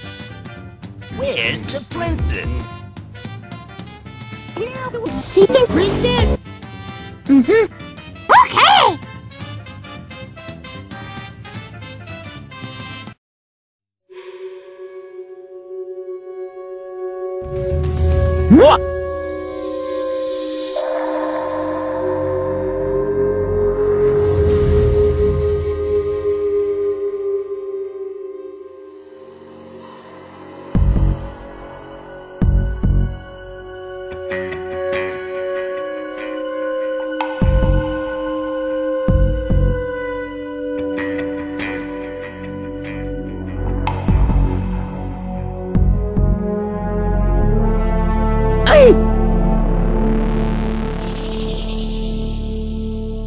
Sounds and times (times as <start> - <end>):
Music: 0.0 - 13.2, 14.1 - 53.2.